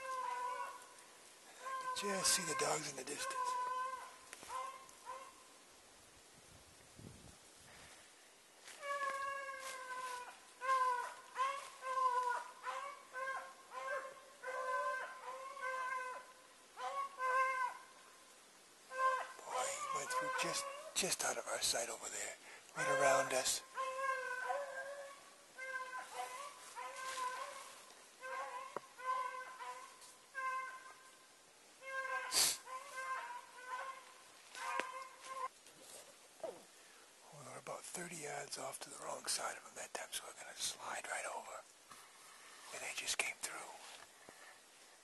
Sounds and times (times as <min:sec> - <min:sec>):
Animal: 0:00.0 - 0:05.4, 0:08.7 - 0:17.9, 0:18.9 - 0:31.2, 0:31.8 - 0:36.7
Outside, rural or natural: 0:00.0 - 0:45.0.